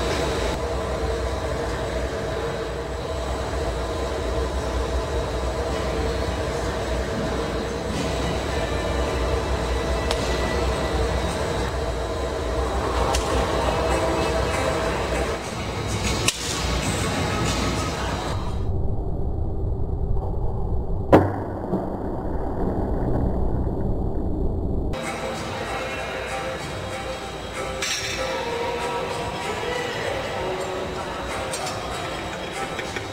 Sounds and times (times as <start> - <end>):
Music: 7.8 - 18.6, 25.0 - 33.1.